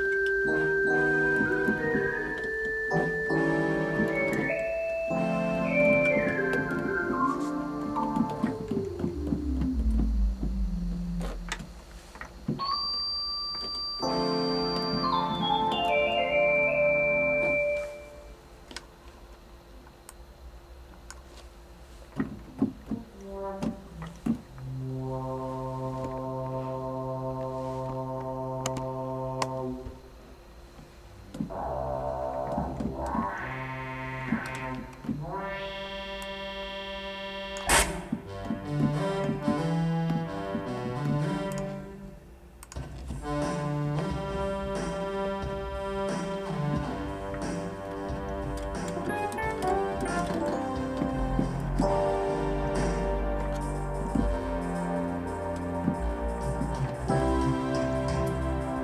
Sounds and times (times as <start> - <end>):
Music: 0.0 - 18.5, 22.6 - 58.8
Sound effect: 31.5 - 38.1.